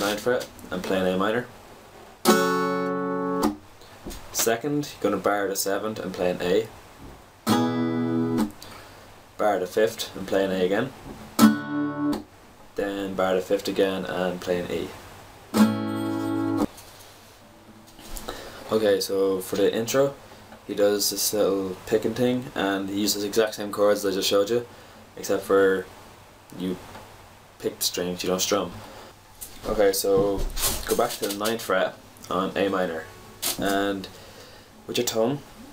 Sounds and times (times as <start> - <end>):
Speech: 0.0 - 1.5, 4.3 - 6.8, 9.4 - 11.0, 12.8 - 15.0, 18.7 - 25.9, 26.5 - 26.8, 27.6 - 28.8, 29.6 - 34.2, 34.9 - 35.5
Acoustic guitar: 2.2 - 4.5, 7.0 - 8.9, 11.1 - 12.3, 15.5 - 18.8.